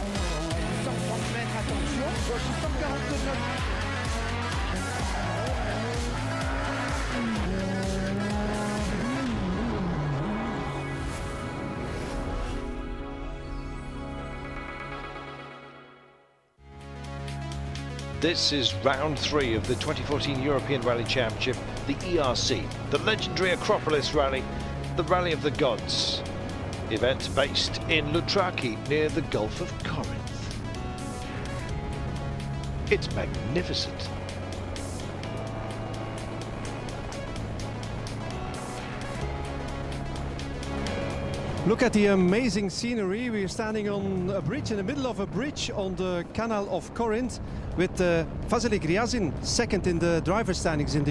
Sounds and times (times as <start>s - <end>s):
Music: 0.0s - 51.1s
Speech: 18.2s - 24.4s, 25.0s - 26.2s, 26.9s - 30.4s, 32.9s - 34.1s, 41.6s - 51.1s.